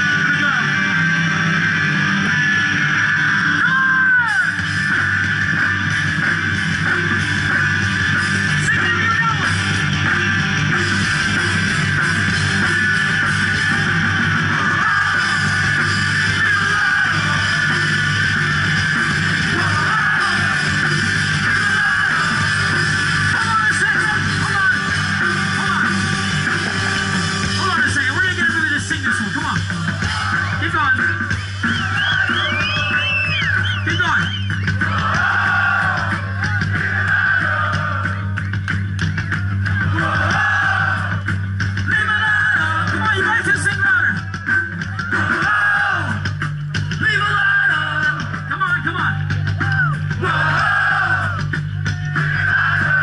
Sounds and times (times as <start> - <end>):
Speech: 0.0 - 0.8, 8.6 - 9.6, 23.4 - 24.9, 27.6 - 29.6, 41.9 - 44.2, 47.0 - 50.0
Crowd: 0.0 - 53.0
Music: 0.0 - 53.0.